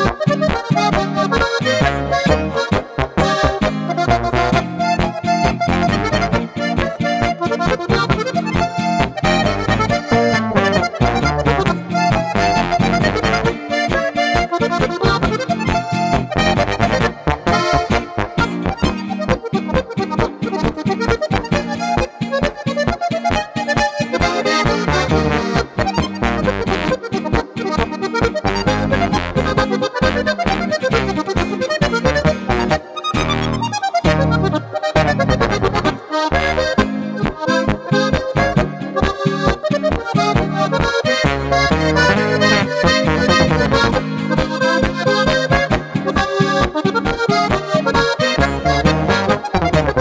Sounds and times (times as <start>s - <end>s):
Accordion: 0.0s - 50.0s
Bowed string instrument: 0.0s - 50.0s
Guitar: 0.0s - 50.0s
Brass instrument: 1.4s - 8.2s, 16.1s - 18.7s, 24.2s - 27.0s, 30.1s - 46.8s, 47.4s - 50.0s.